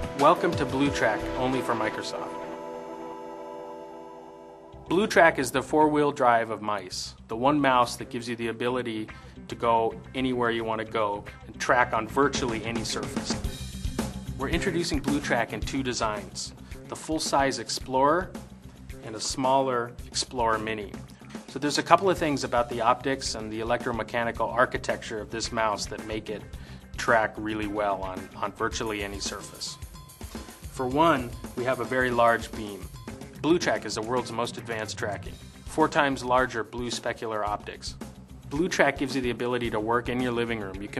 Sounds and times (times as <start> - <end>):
Music: 0.0 - 40.9
Speech: 0.2 - 2.4, 4.9 - 13.4, 14.4 - 18.3, 19.0 - 29.8, 30.8 - 40.9.